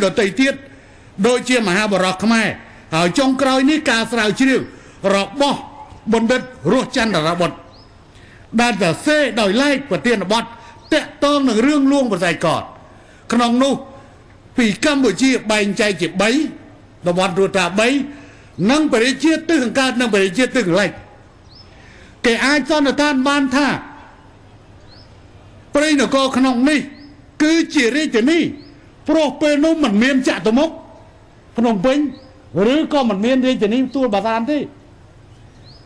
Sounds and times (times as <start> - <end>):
Male speech, man speaking: 0.0 - 7.6, 8.6 - 14.0, 14.6 - 21.1, 22.3 - 24.0, 25.7 - 31.0, 31.6 - 34.8
Narration, monologue: 0.0 - 35.8.